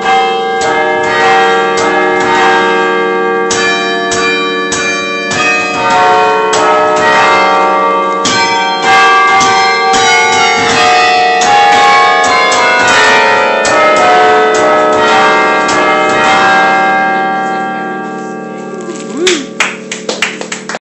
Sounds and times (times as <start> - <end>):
Speech: 17.1 - 17.9, 18.5 - 19.6.